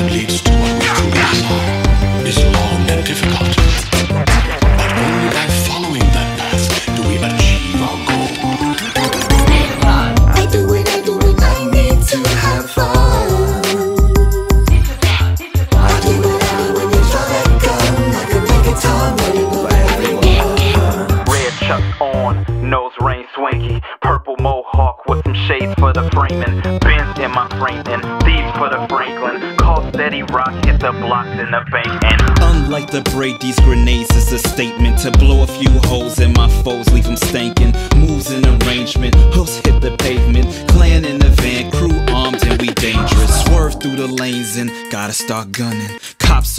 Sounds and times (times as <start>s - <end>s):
Music: 0.0s - 46.5s.